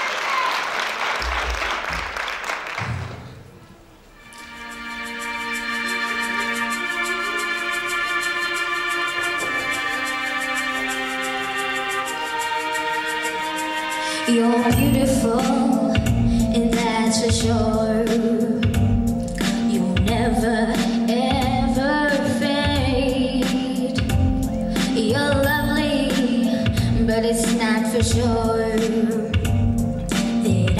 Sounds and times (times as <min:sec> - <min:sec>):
Music: 0:04.0 - 0:30.7
Female singing: 0:14.3 - 0:18.7, 0:19.7 - 0:24.1, 0:24.8 - 0:29.4, 0:30.4 - 0:30.7
Child singing: 0:19.7 - 0:24.0.